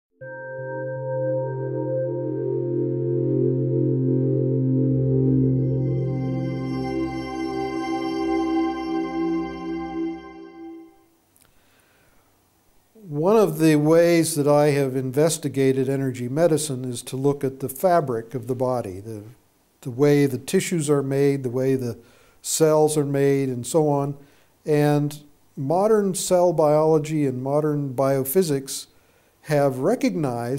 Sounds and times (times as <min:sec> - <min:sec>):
New-age music: 0:00.1 - 0:11.1.